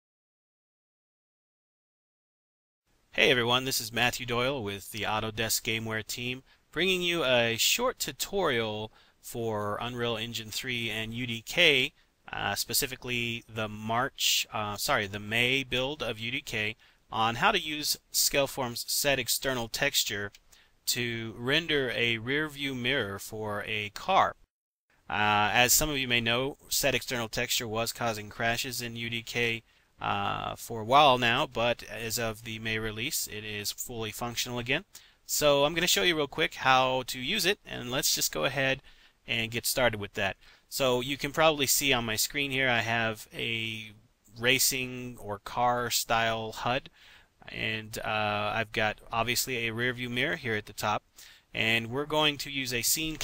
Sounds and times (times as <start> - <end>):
Speech: 3.2 - 24.5, 25.1 - 53.2.